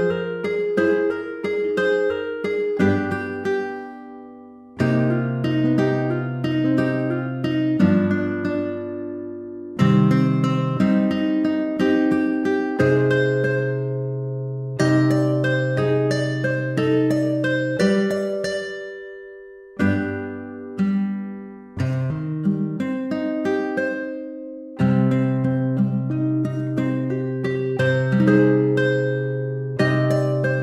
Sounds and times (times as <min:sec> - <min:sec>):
Acoustic guitar: 0:00.0 - 0:30.6.